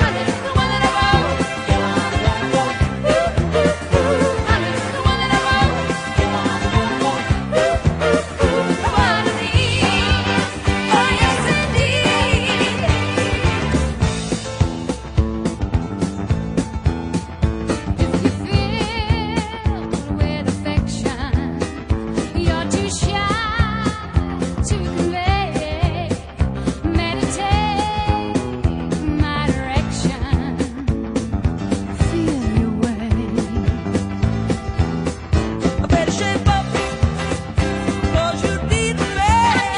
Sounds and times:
Soul music: 0.0 - 39.7.

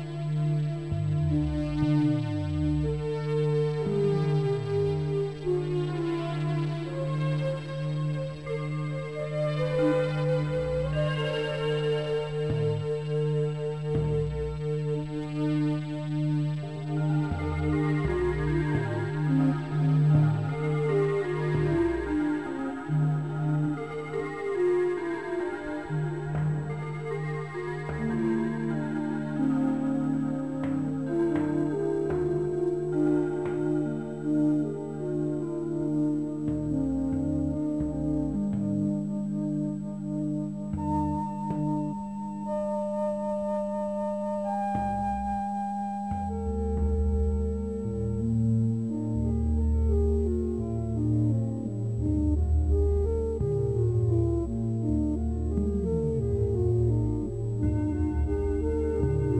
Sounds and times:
Music: 0.0 - 59.3.

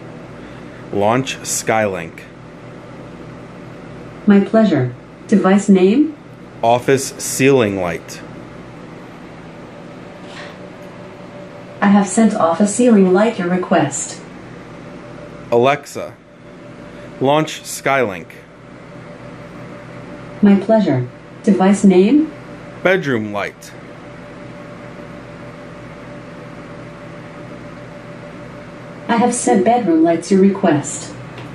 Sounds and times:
Speech: 0.9 - 2.3, 4.3 - 8.2, 11.8 - 14.2, 15.5 - 16.2, 17.2 - 18.5, 20.4 - 23.8, 29.1 - 31.2.

